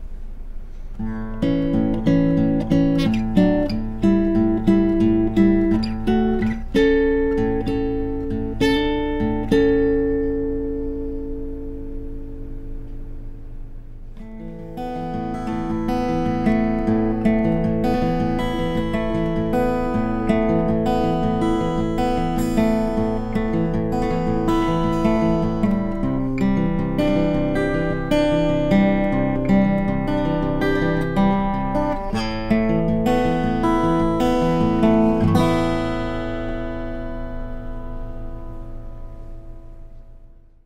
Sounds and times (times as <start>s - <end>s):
Acoustic guitar: 0.0s - 40.6s.